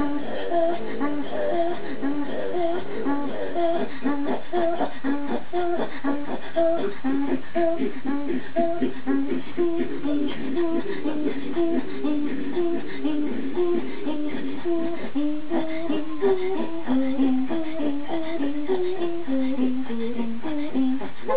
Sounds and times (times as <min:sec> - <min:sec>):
Female singing: 0:00.0 - 0:21.3.